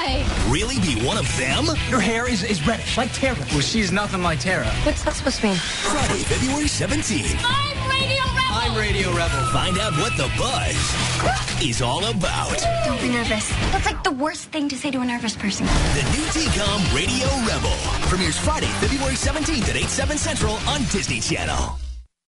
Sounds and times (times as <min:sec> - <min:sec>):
Music: 0:00.0 - 0:22.1.